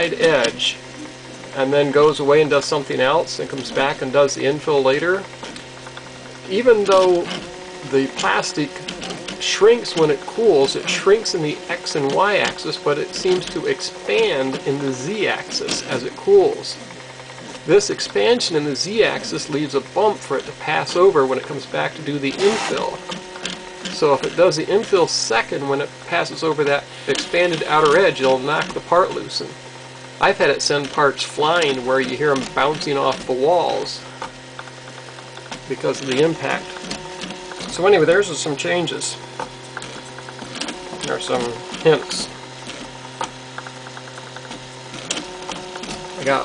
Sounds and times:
Speech: 0:00.0 - 0:00.8, 0:01.6 - 0:05.3, 0:06.5 - 0:16.8, 0:17.7 - 0:23.0, 0:24.0 - 0:29.6, 0:30.2 - 0:34.0, 0:35.7 - 0:36.7, 0:37.7 - 0:39.2, 0:41.1 - 0:42.4, 0:46.2 - 0:46.4
Printer: 0:00.0 - 0:46.4.

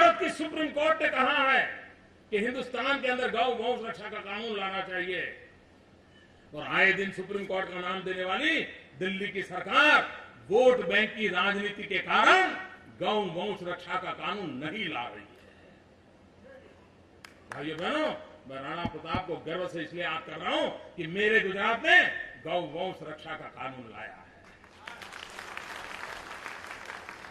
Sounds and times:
Male speech, man speaking: 0:00.0 - 0:05.4, 0:06.6 - 0:15.3, 0:17.6 - 0:25.0
Narration, monologue: 0:00.0 - 0:25.2.

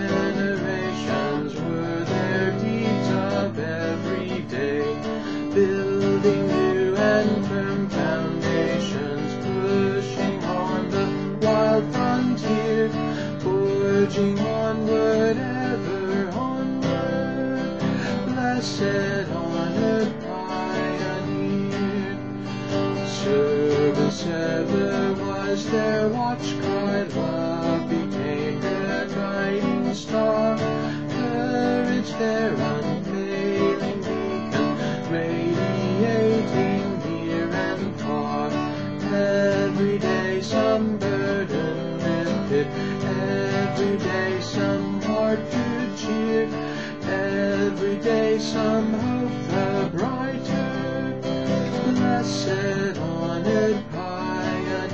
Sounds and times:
Acoustic guitar: 0:00.0 - 0:54.9.

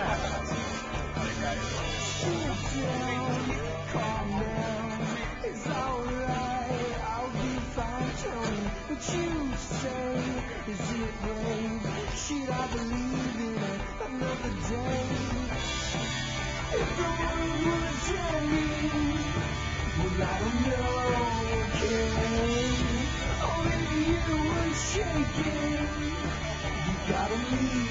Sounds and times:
Music: 0:00.0 - 0:27.9.

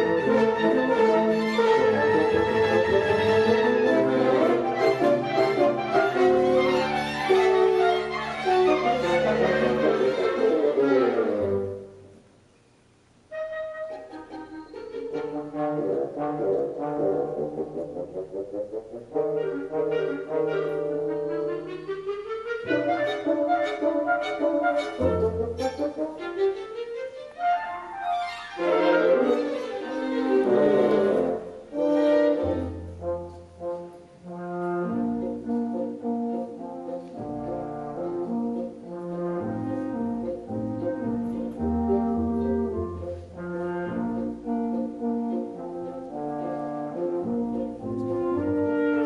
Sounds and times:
Violin, fiddle: 0:00.0 - 0:11.8, 0:20.0 - 0:32.9
Double bass: 0:00.0 - 0:12.2, 0:13.4 - 0:26.5, 0:28.6 - 0:49.0
Cello: 0:00.0 - 0:12.3, 0:13.3 - 0:49.0
Classical music: 0:00.0 - 0:49.0
Orchestra: 0:00.0 - 0:49.0.

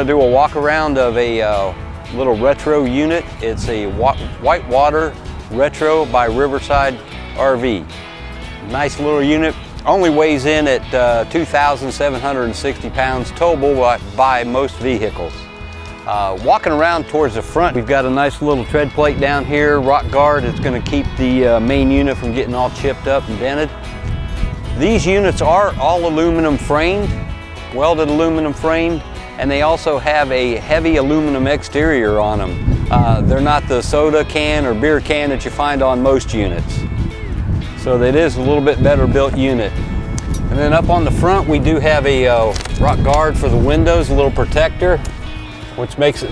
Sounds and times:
Speech: 0:00.0 - 0:07.8, 0:08.6 - 0:15.4, 0:16.1 - 0:23.7, 0:24.8 - 0:27.1, 0:27.8 - 0:36.8, 0:37.8 - 0:39.7, 0:40.5 - 0:45.0, 0:45.8 - 0:46.3
Music: 0:00.0 - 0:46.3.

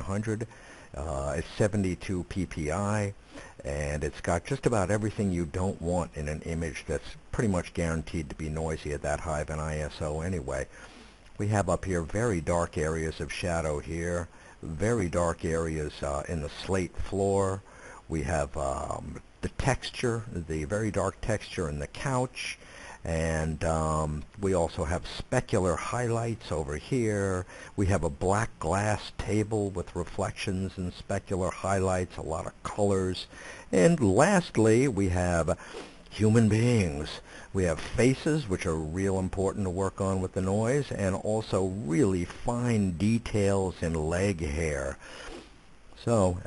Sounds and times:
Speech: 0:00.0 - 0:10.7, 0:11.4 - 0:45.0, 0:46.0 - 0:46.4.

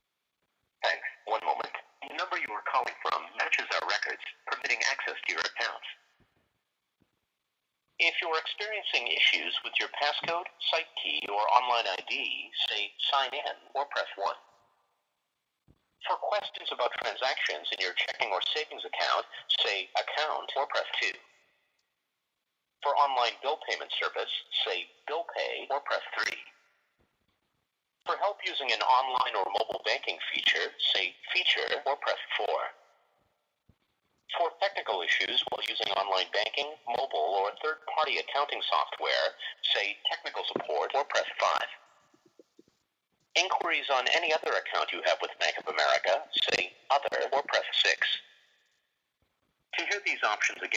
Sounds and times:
Speech: 0:00.8 - 0:06.1, 0:08.0 - 0:14.4, 0:16.0 - 0:21.3, 0:22.8 - 0:26.6, 0:28.1 - 0:32.8, 0:34.3 - 0:41.9, 0:43.4 - 0:48.4, 0:49.7 - 0:50.7.

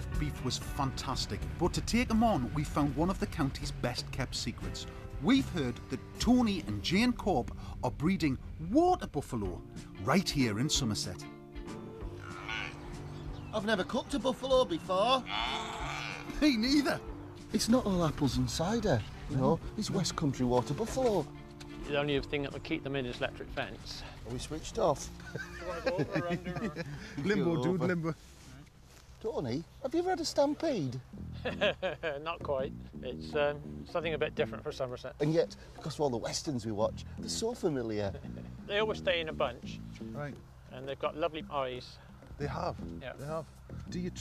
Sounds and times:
Speech: 0:00.0 - 0:11.2, 0:32.3 - 0:44.2
Music: 0:00.0 - 0:44.2.

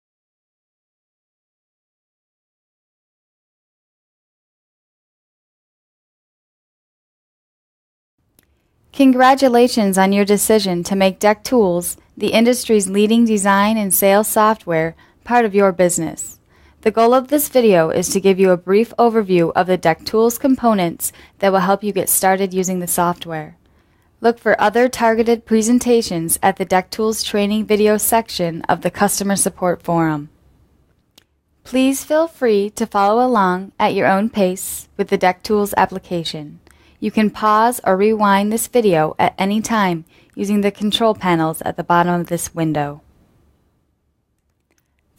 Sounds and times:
Speech: 0:09.0 - 0:23.6, 0:24.2 - 0:30.3, 0:31.7 - 0:43.0.

